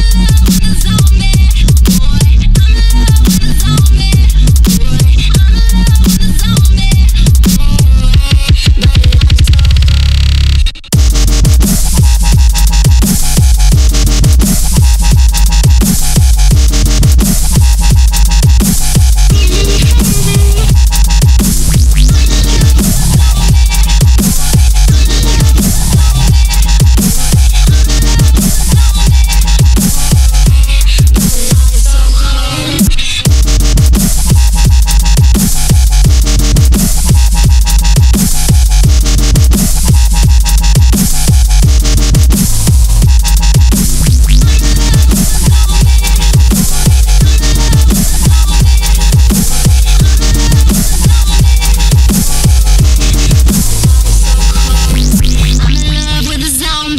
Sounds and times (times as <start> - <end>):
Dubstep: 0.0 - 56.9.